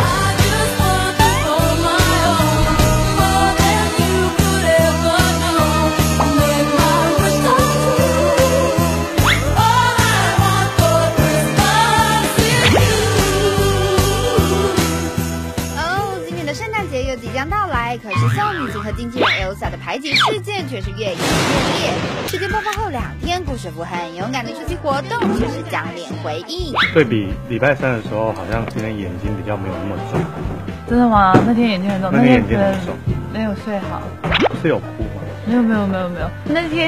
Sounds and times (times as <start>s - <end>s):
Music: 0.0s - 36.8s
Speech: 15.8s - 21.2s, 30.9s - 33.5s.